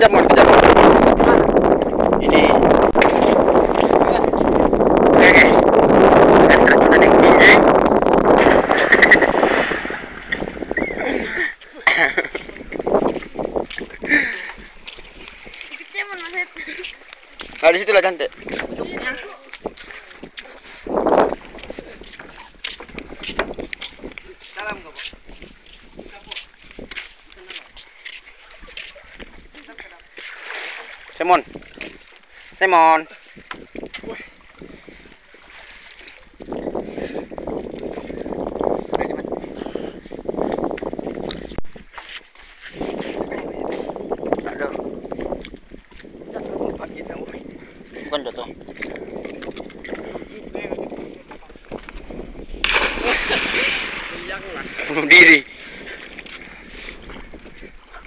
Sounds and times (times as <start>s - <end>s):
Outside, rural or natural: 0.0s - 58.0s.